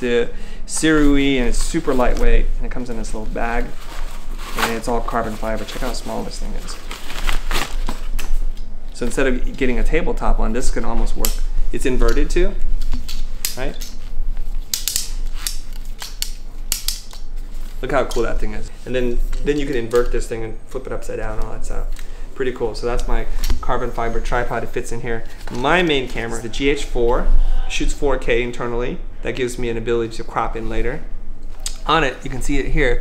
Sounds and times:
Speech: 0:00.0 - 0:03.8, 0:04.6 - 0:06.9, 0:09.0 - 0:12.6, 0:17.8 - 0:31.1, 0:31.8 - 0:33.0.

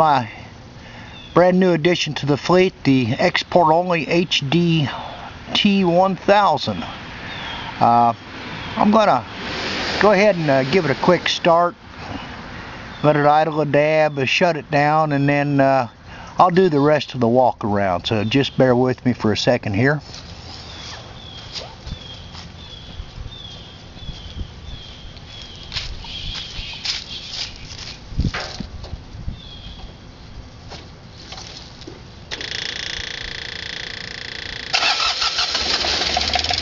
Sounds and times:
Walk, footsteps: 0:25.2 - 0:28.7.

